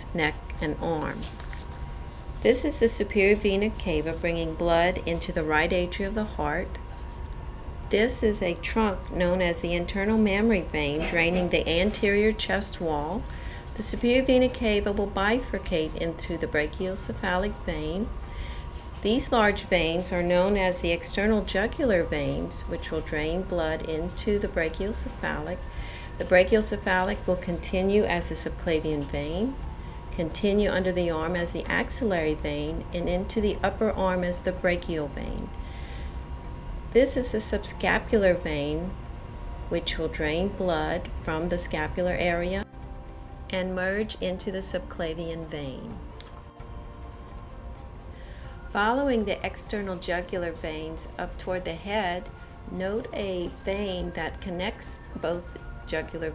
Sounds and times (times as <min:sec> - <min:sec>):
Speech: 0:00.0 - 0:01.3, 0:02.5 - 0:06.8, 0:07.9 - 0:13.2, 0:13.8 - 0:18.1, 0:19.0 - 0:25.6, 0:26.2 - 0:29.6, 0:30.2 - 0:35.5, 0:37.0 - 0:39.0, 0:39.8 - 0:42.7, 0:43.5 - 0:46.0, 0:48.8 - 0:56.3.